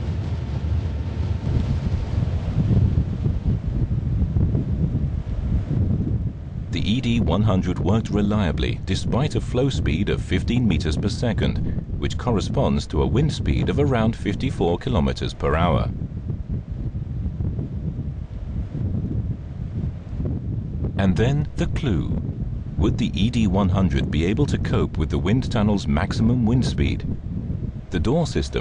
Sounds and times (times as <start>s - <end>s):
Outside, rural or natural: 0.0s - 28.6s
Speech: 6.8s - 16.0s, 21.0s - 22.2s, 22.8s - 27.1s, 27.9s - 28.6s.